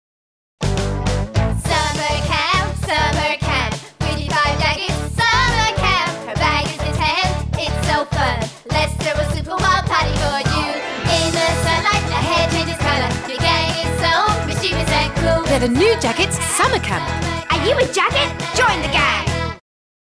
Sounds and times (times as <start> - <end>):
Music for children: 0.6 - 19.6
Child speech, kid speaking: 16.6 - 19.3.